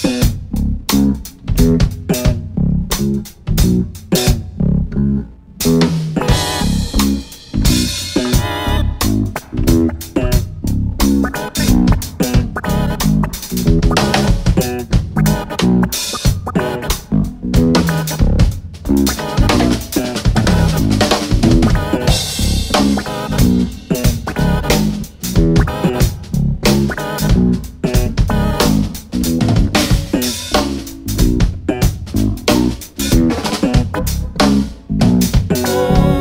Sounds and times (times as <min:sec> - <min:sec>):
Bass drum: 0:00.0 - 0:36.2
Bass guitar: 0:00.0 - 0:36.2
Drum kit: 0:00.0 - 0:36.2.